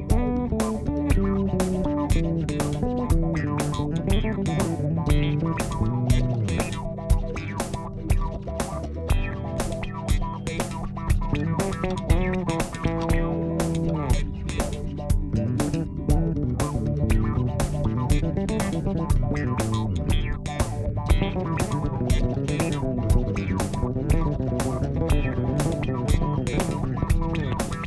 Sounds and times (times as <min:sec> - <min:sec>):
Bass guitar: 0:00.0 - 0:27.8
Funk: 0:00.0 - 0:27.8.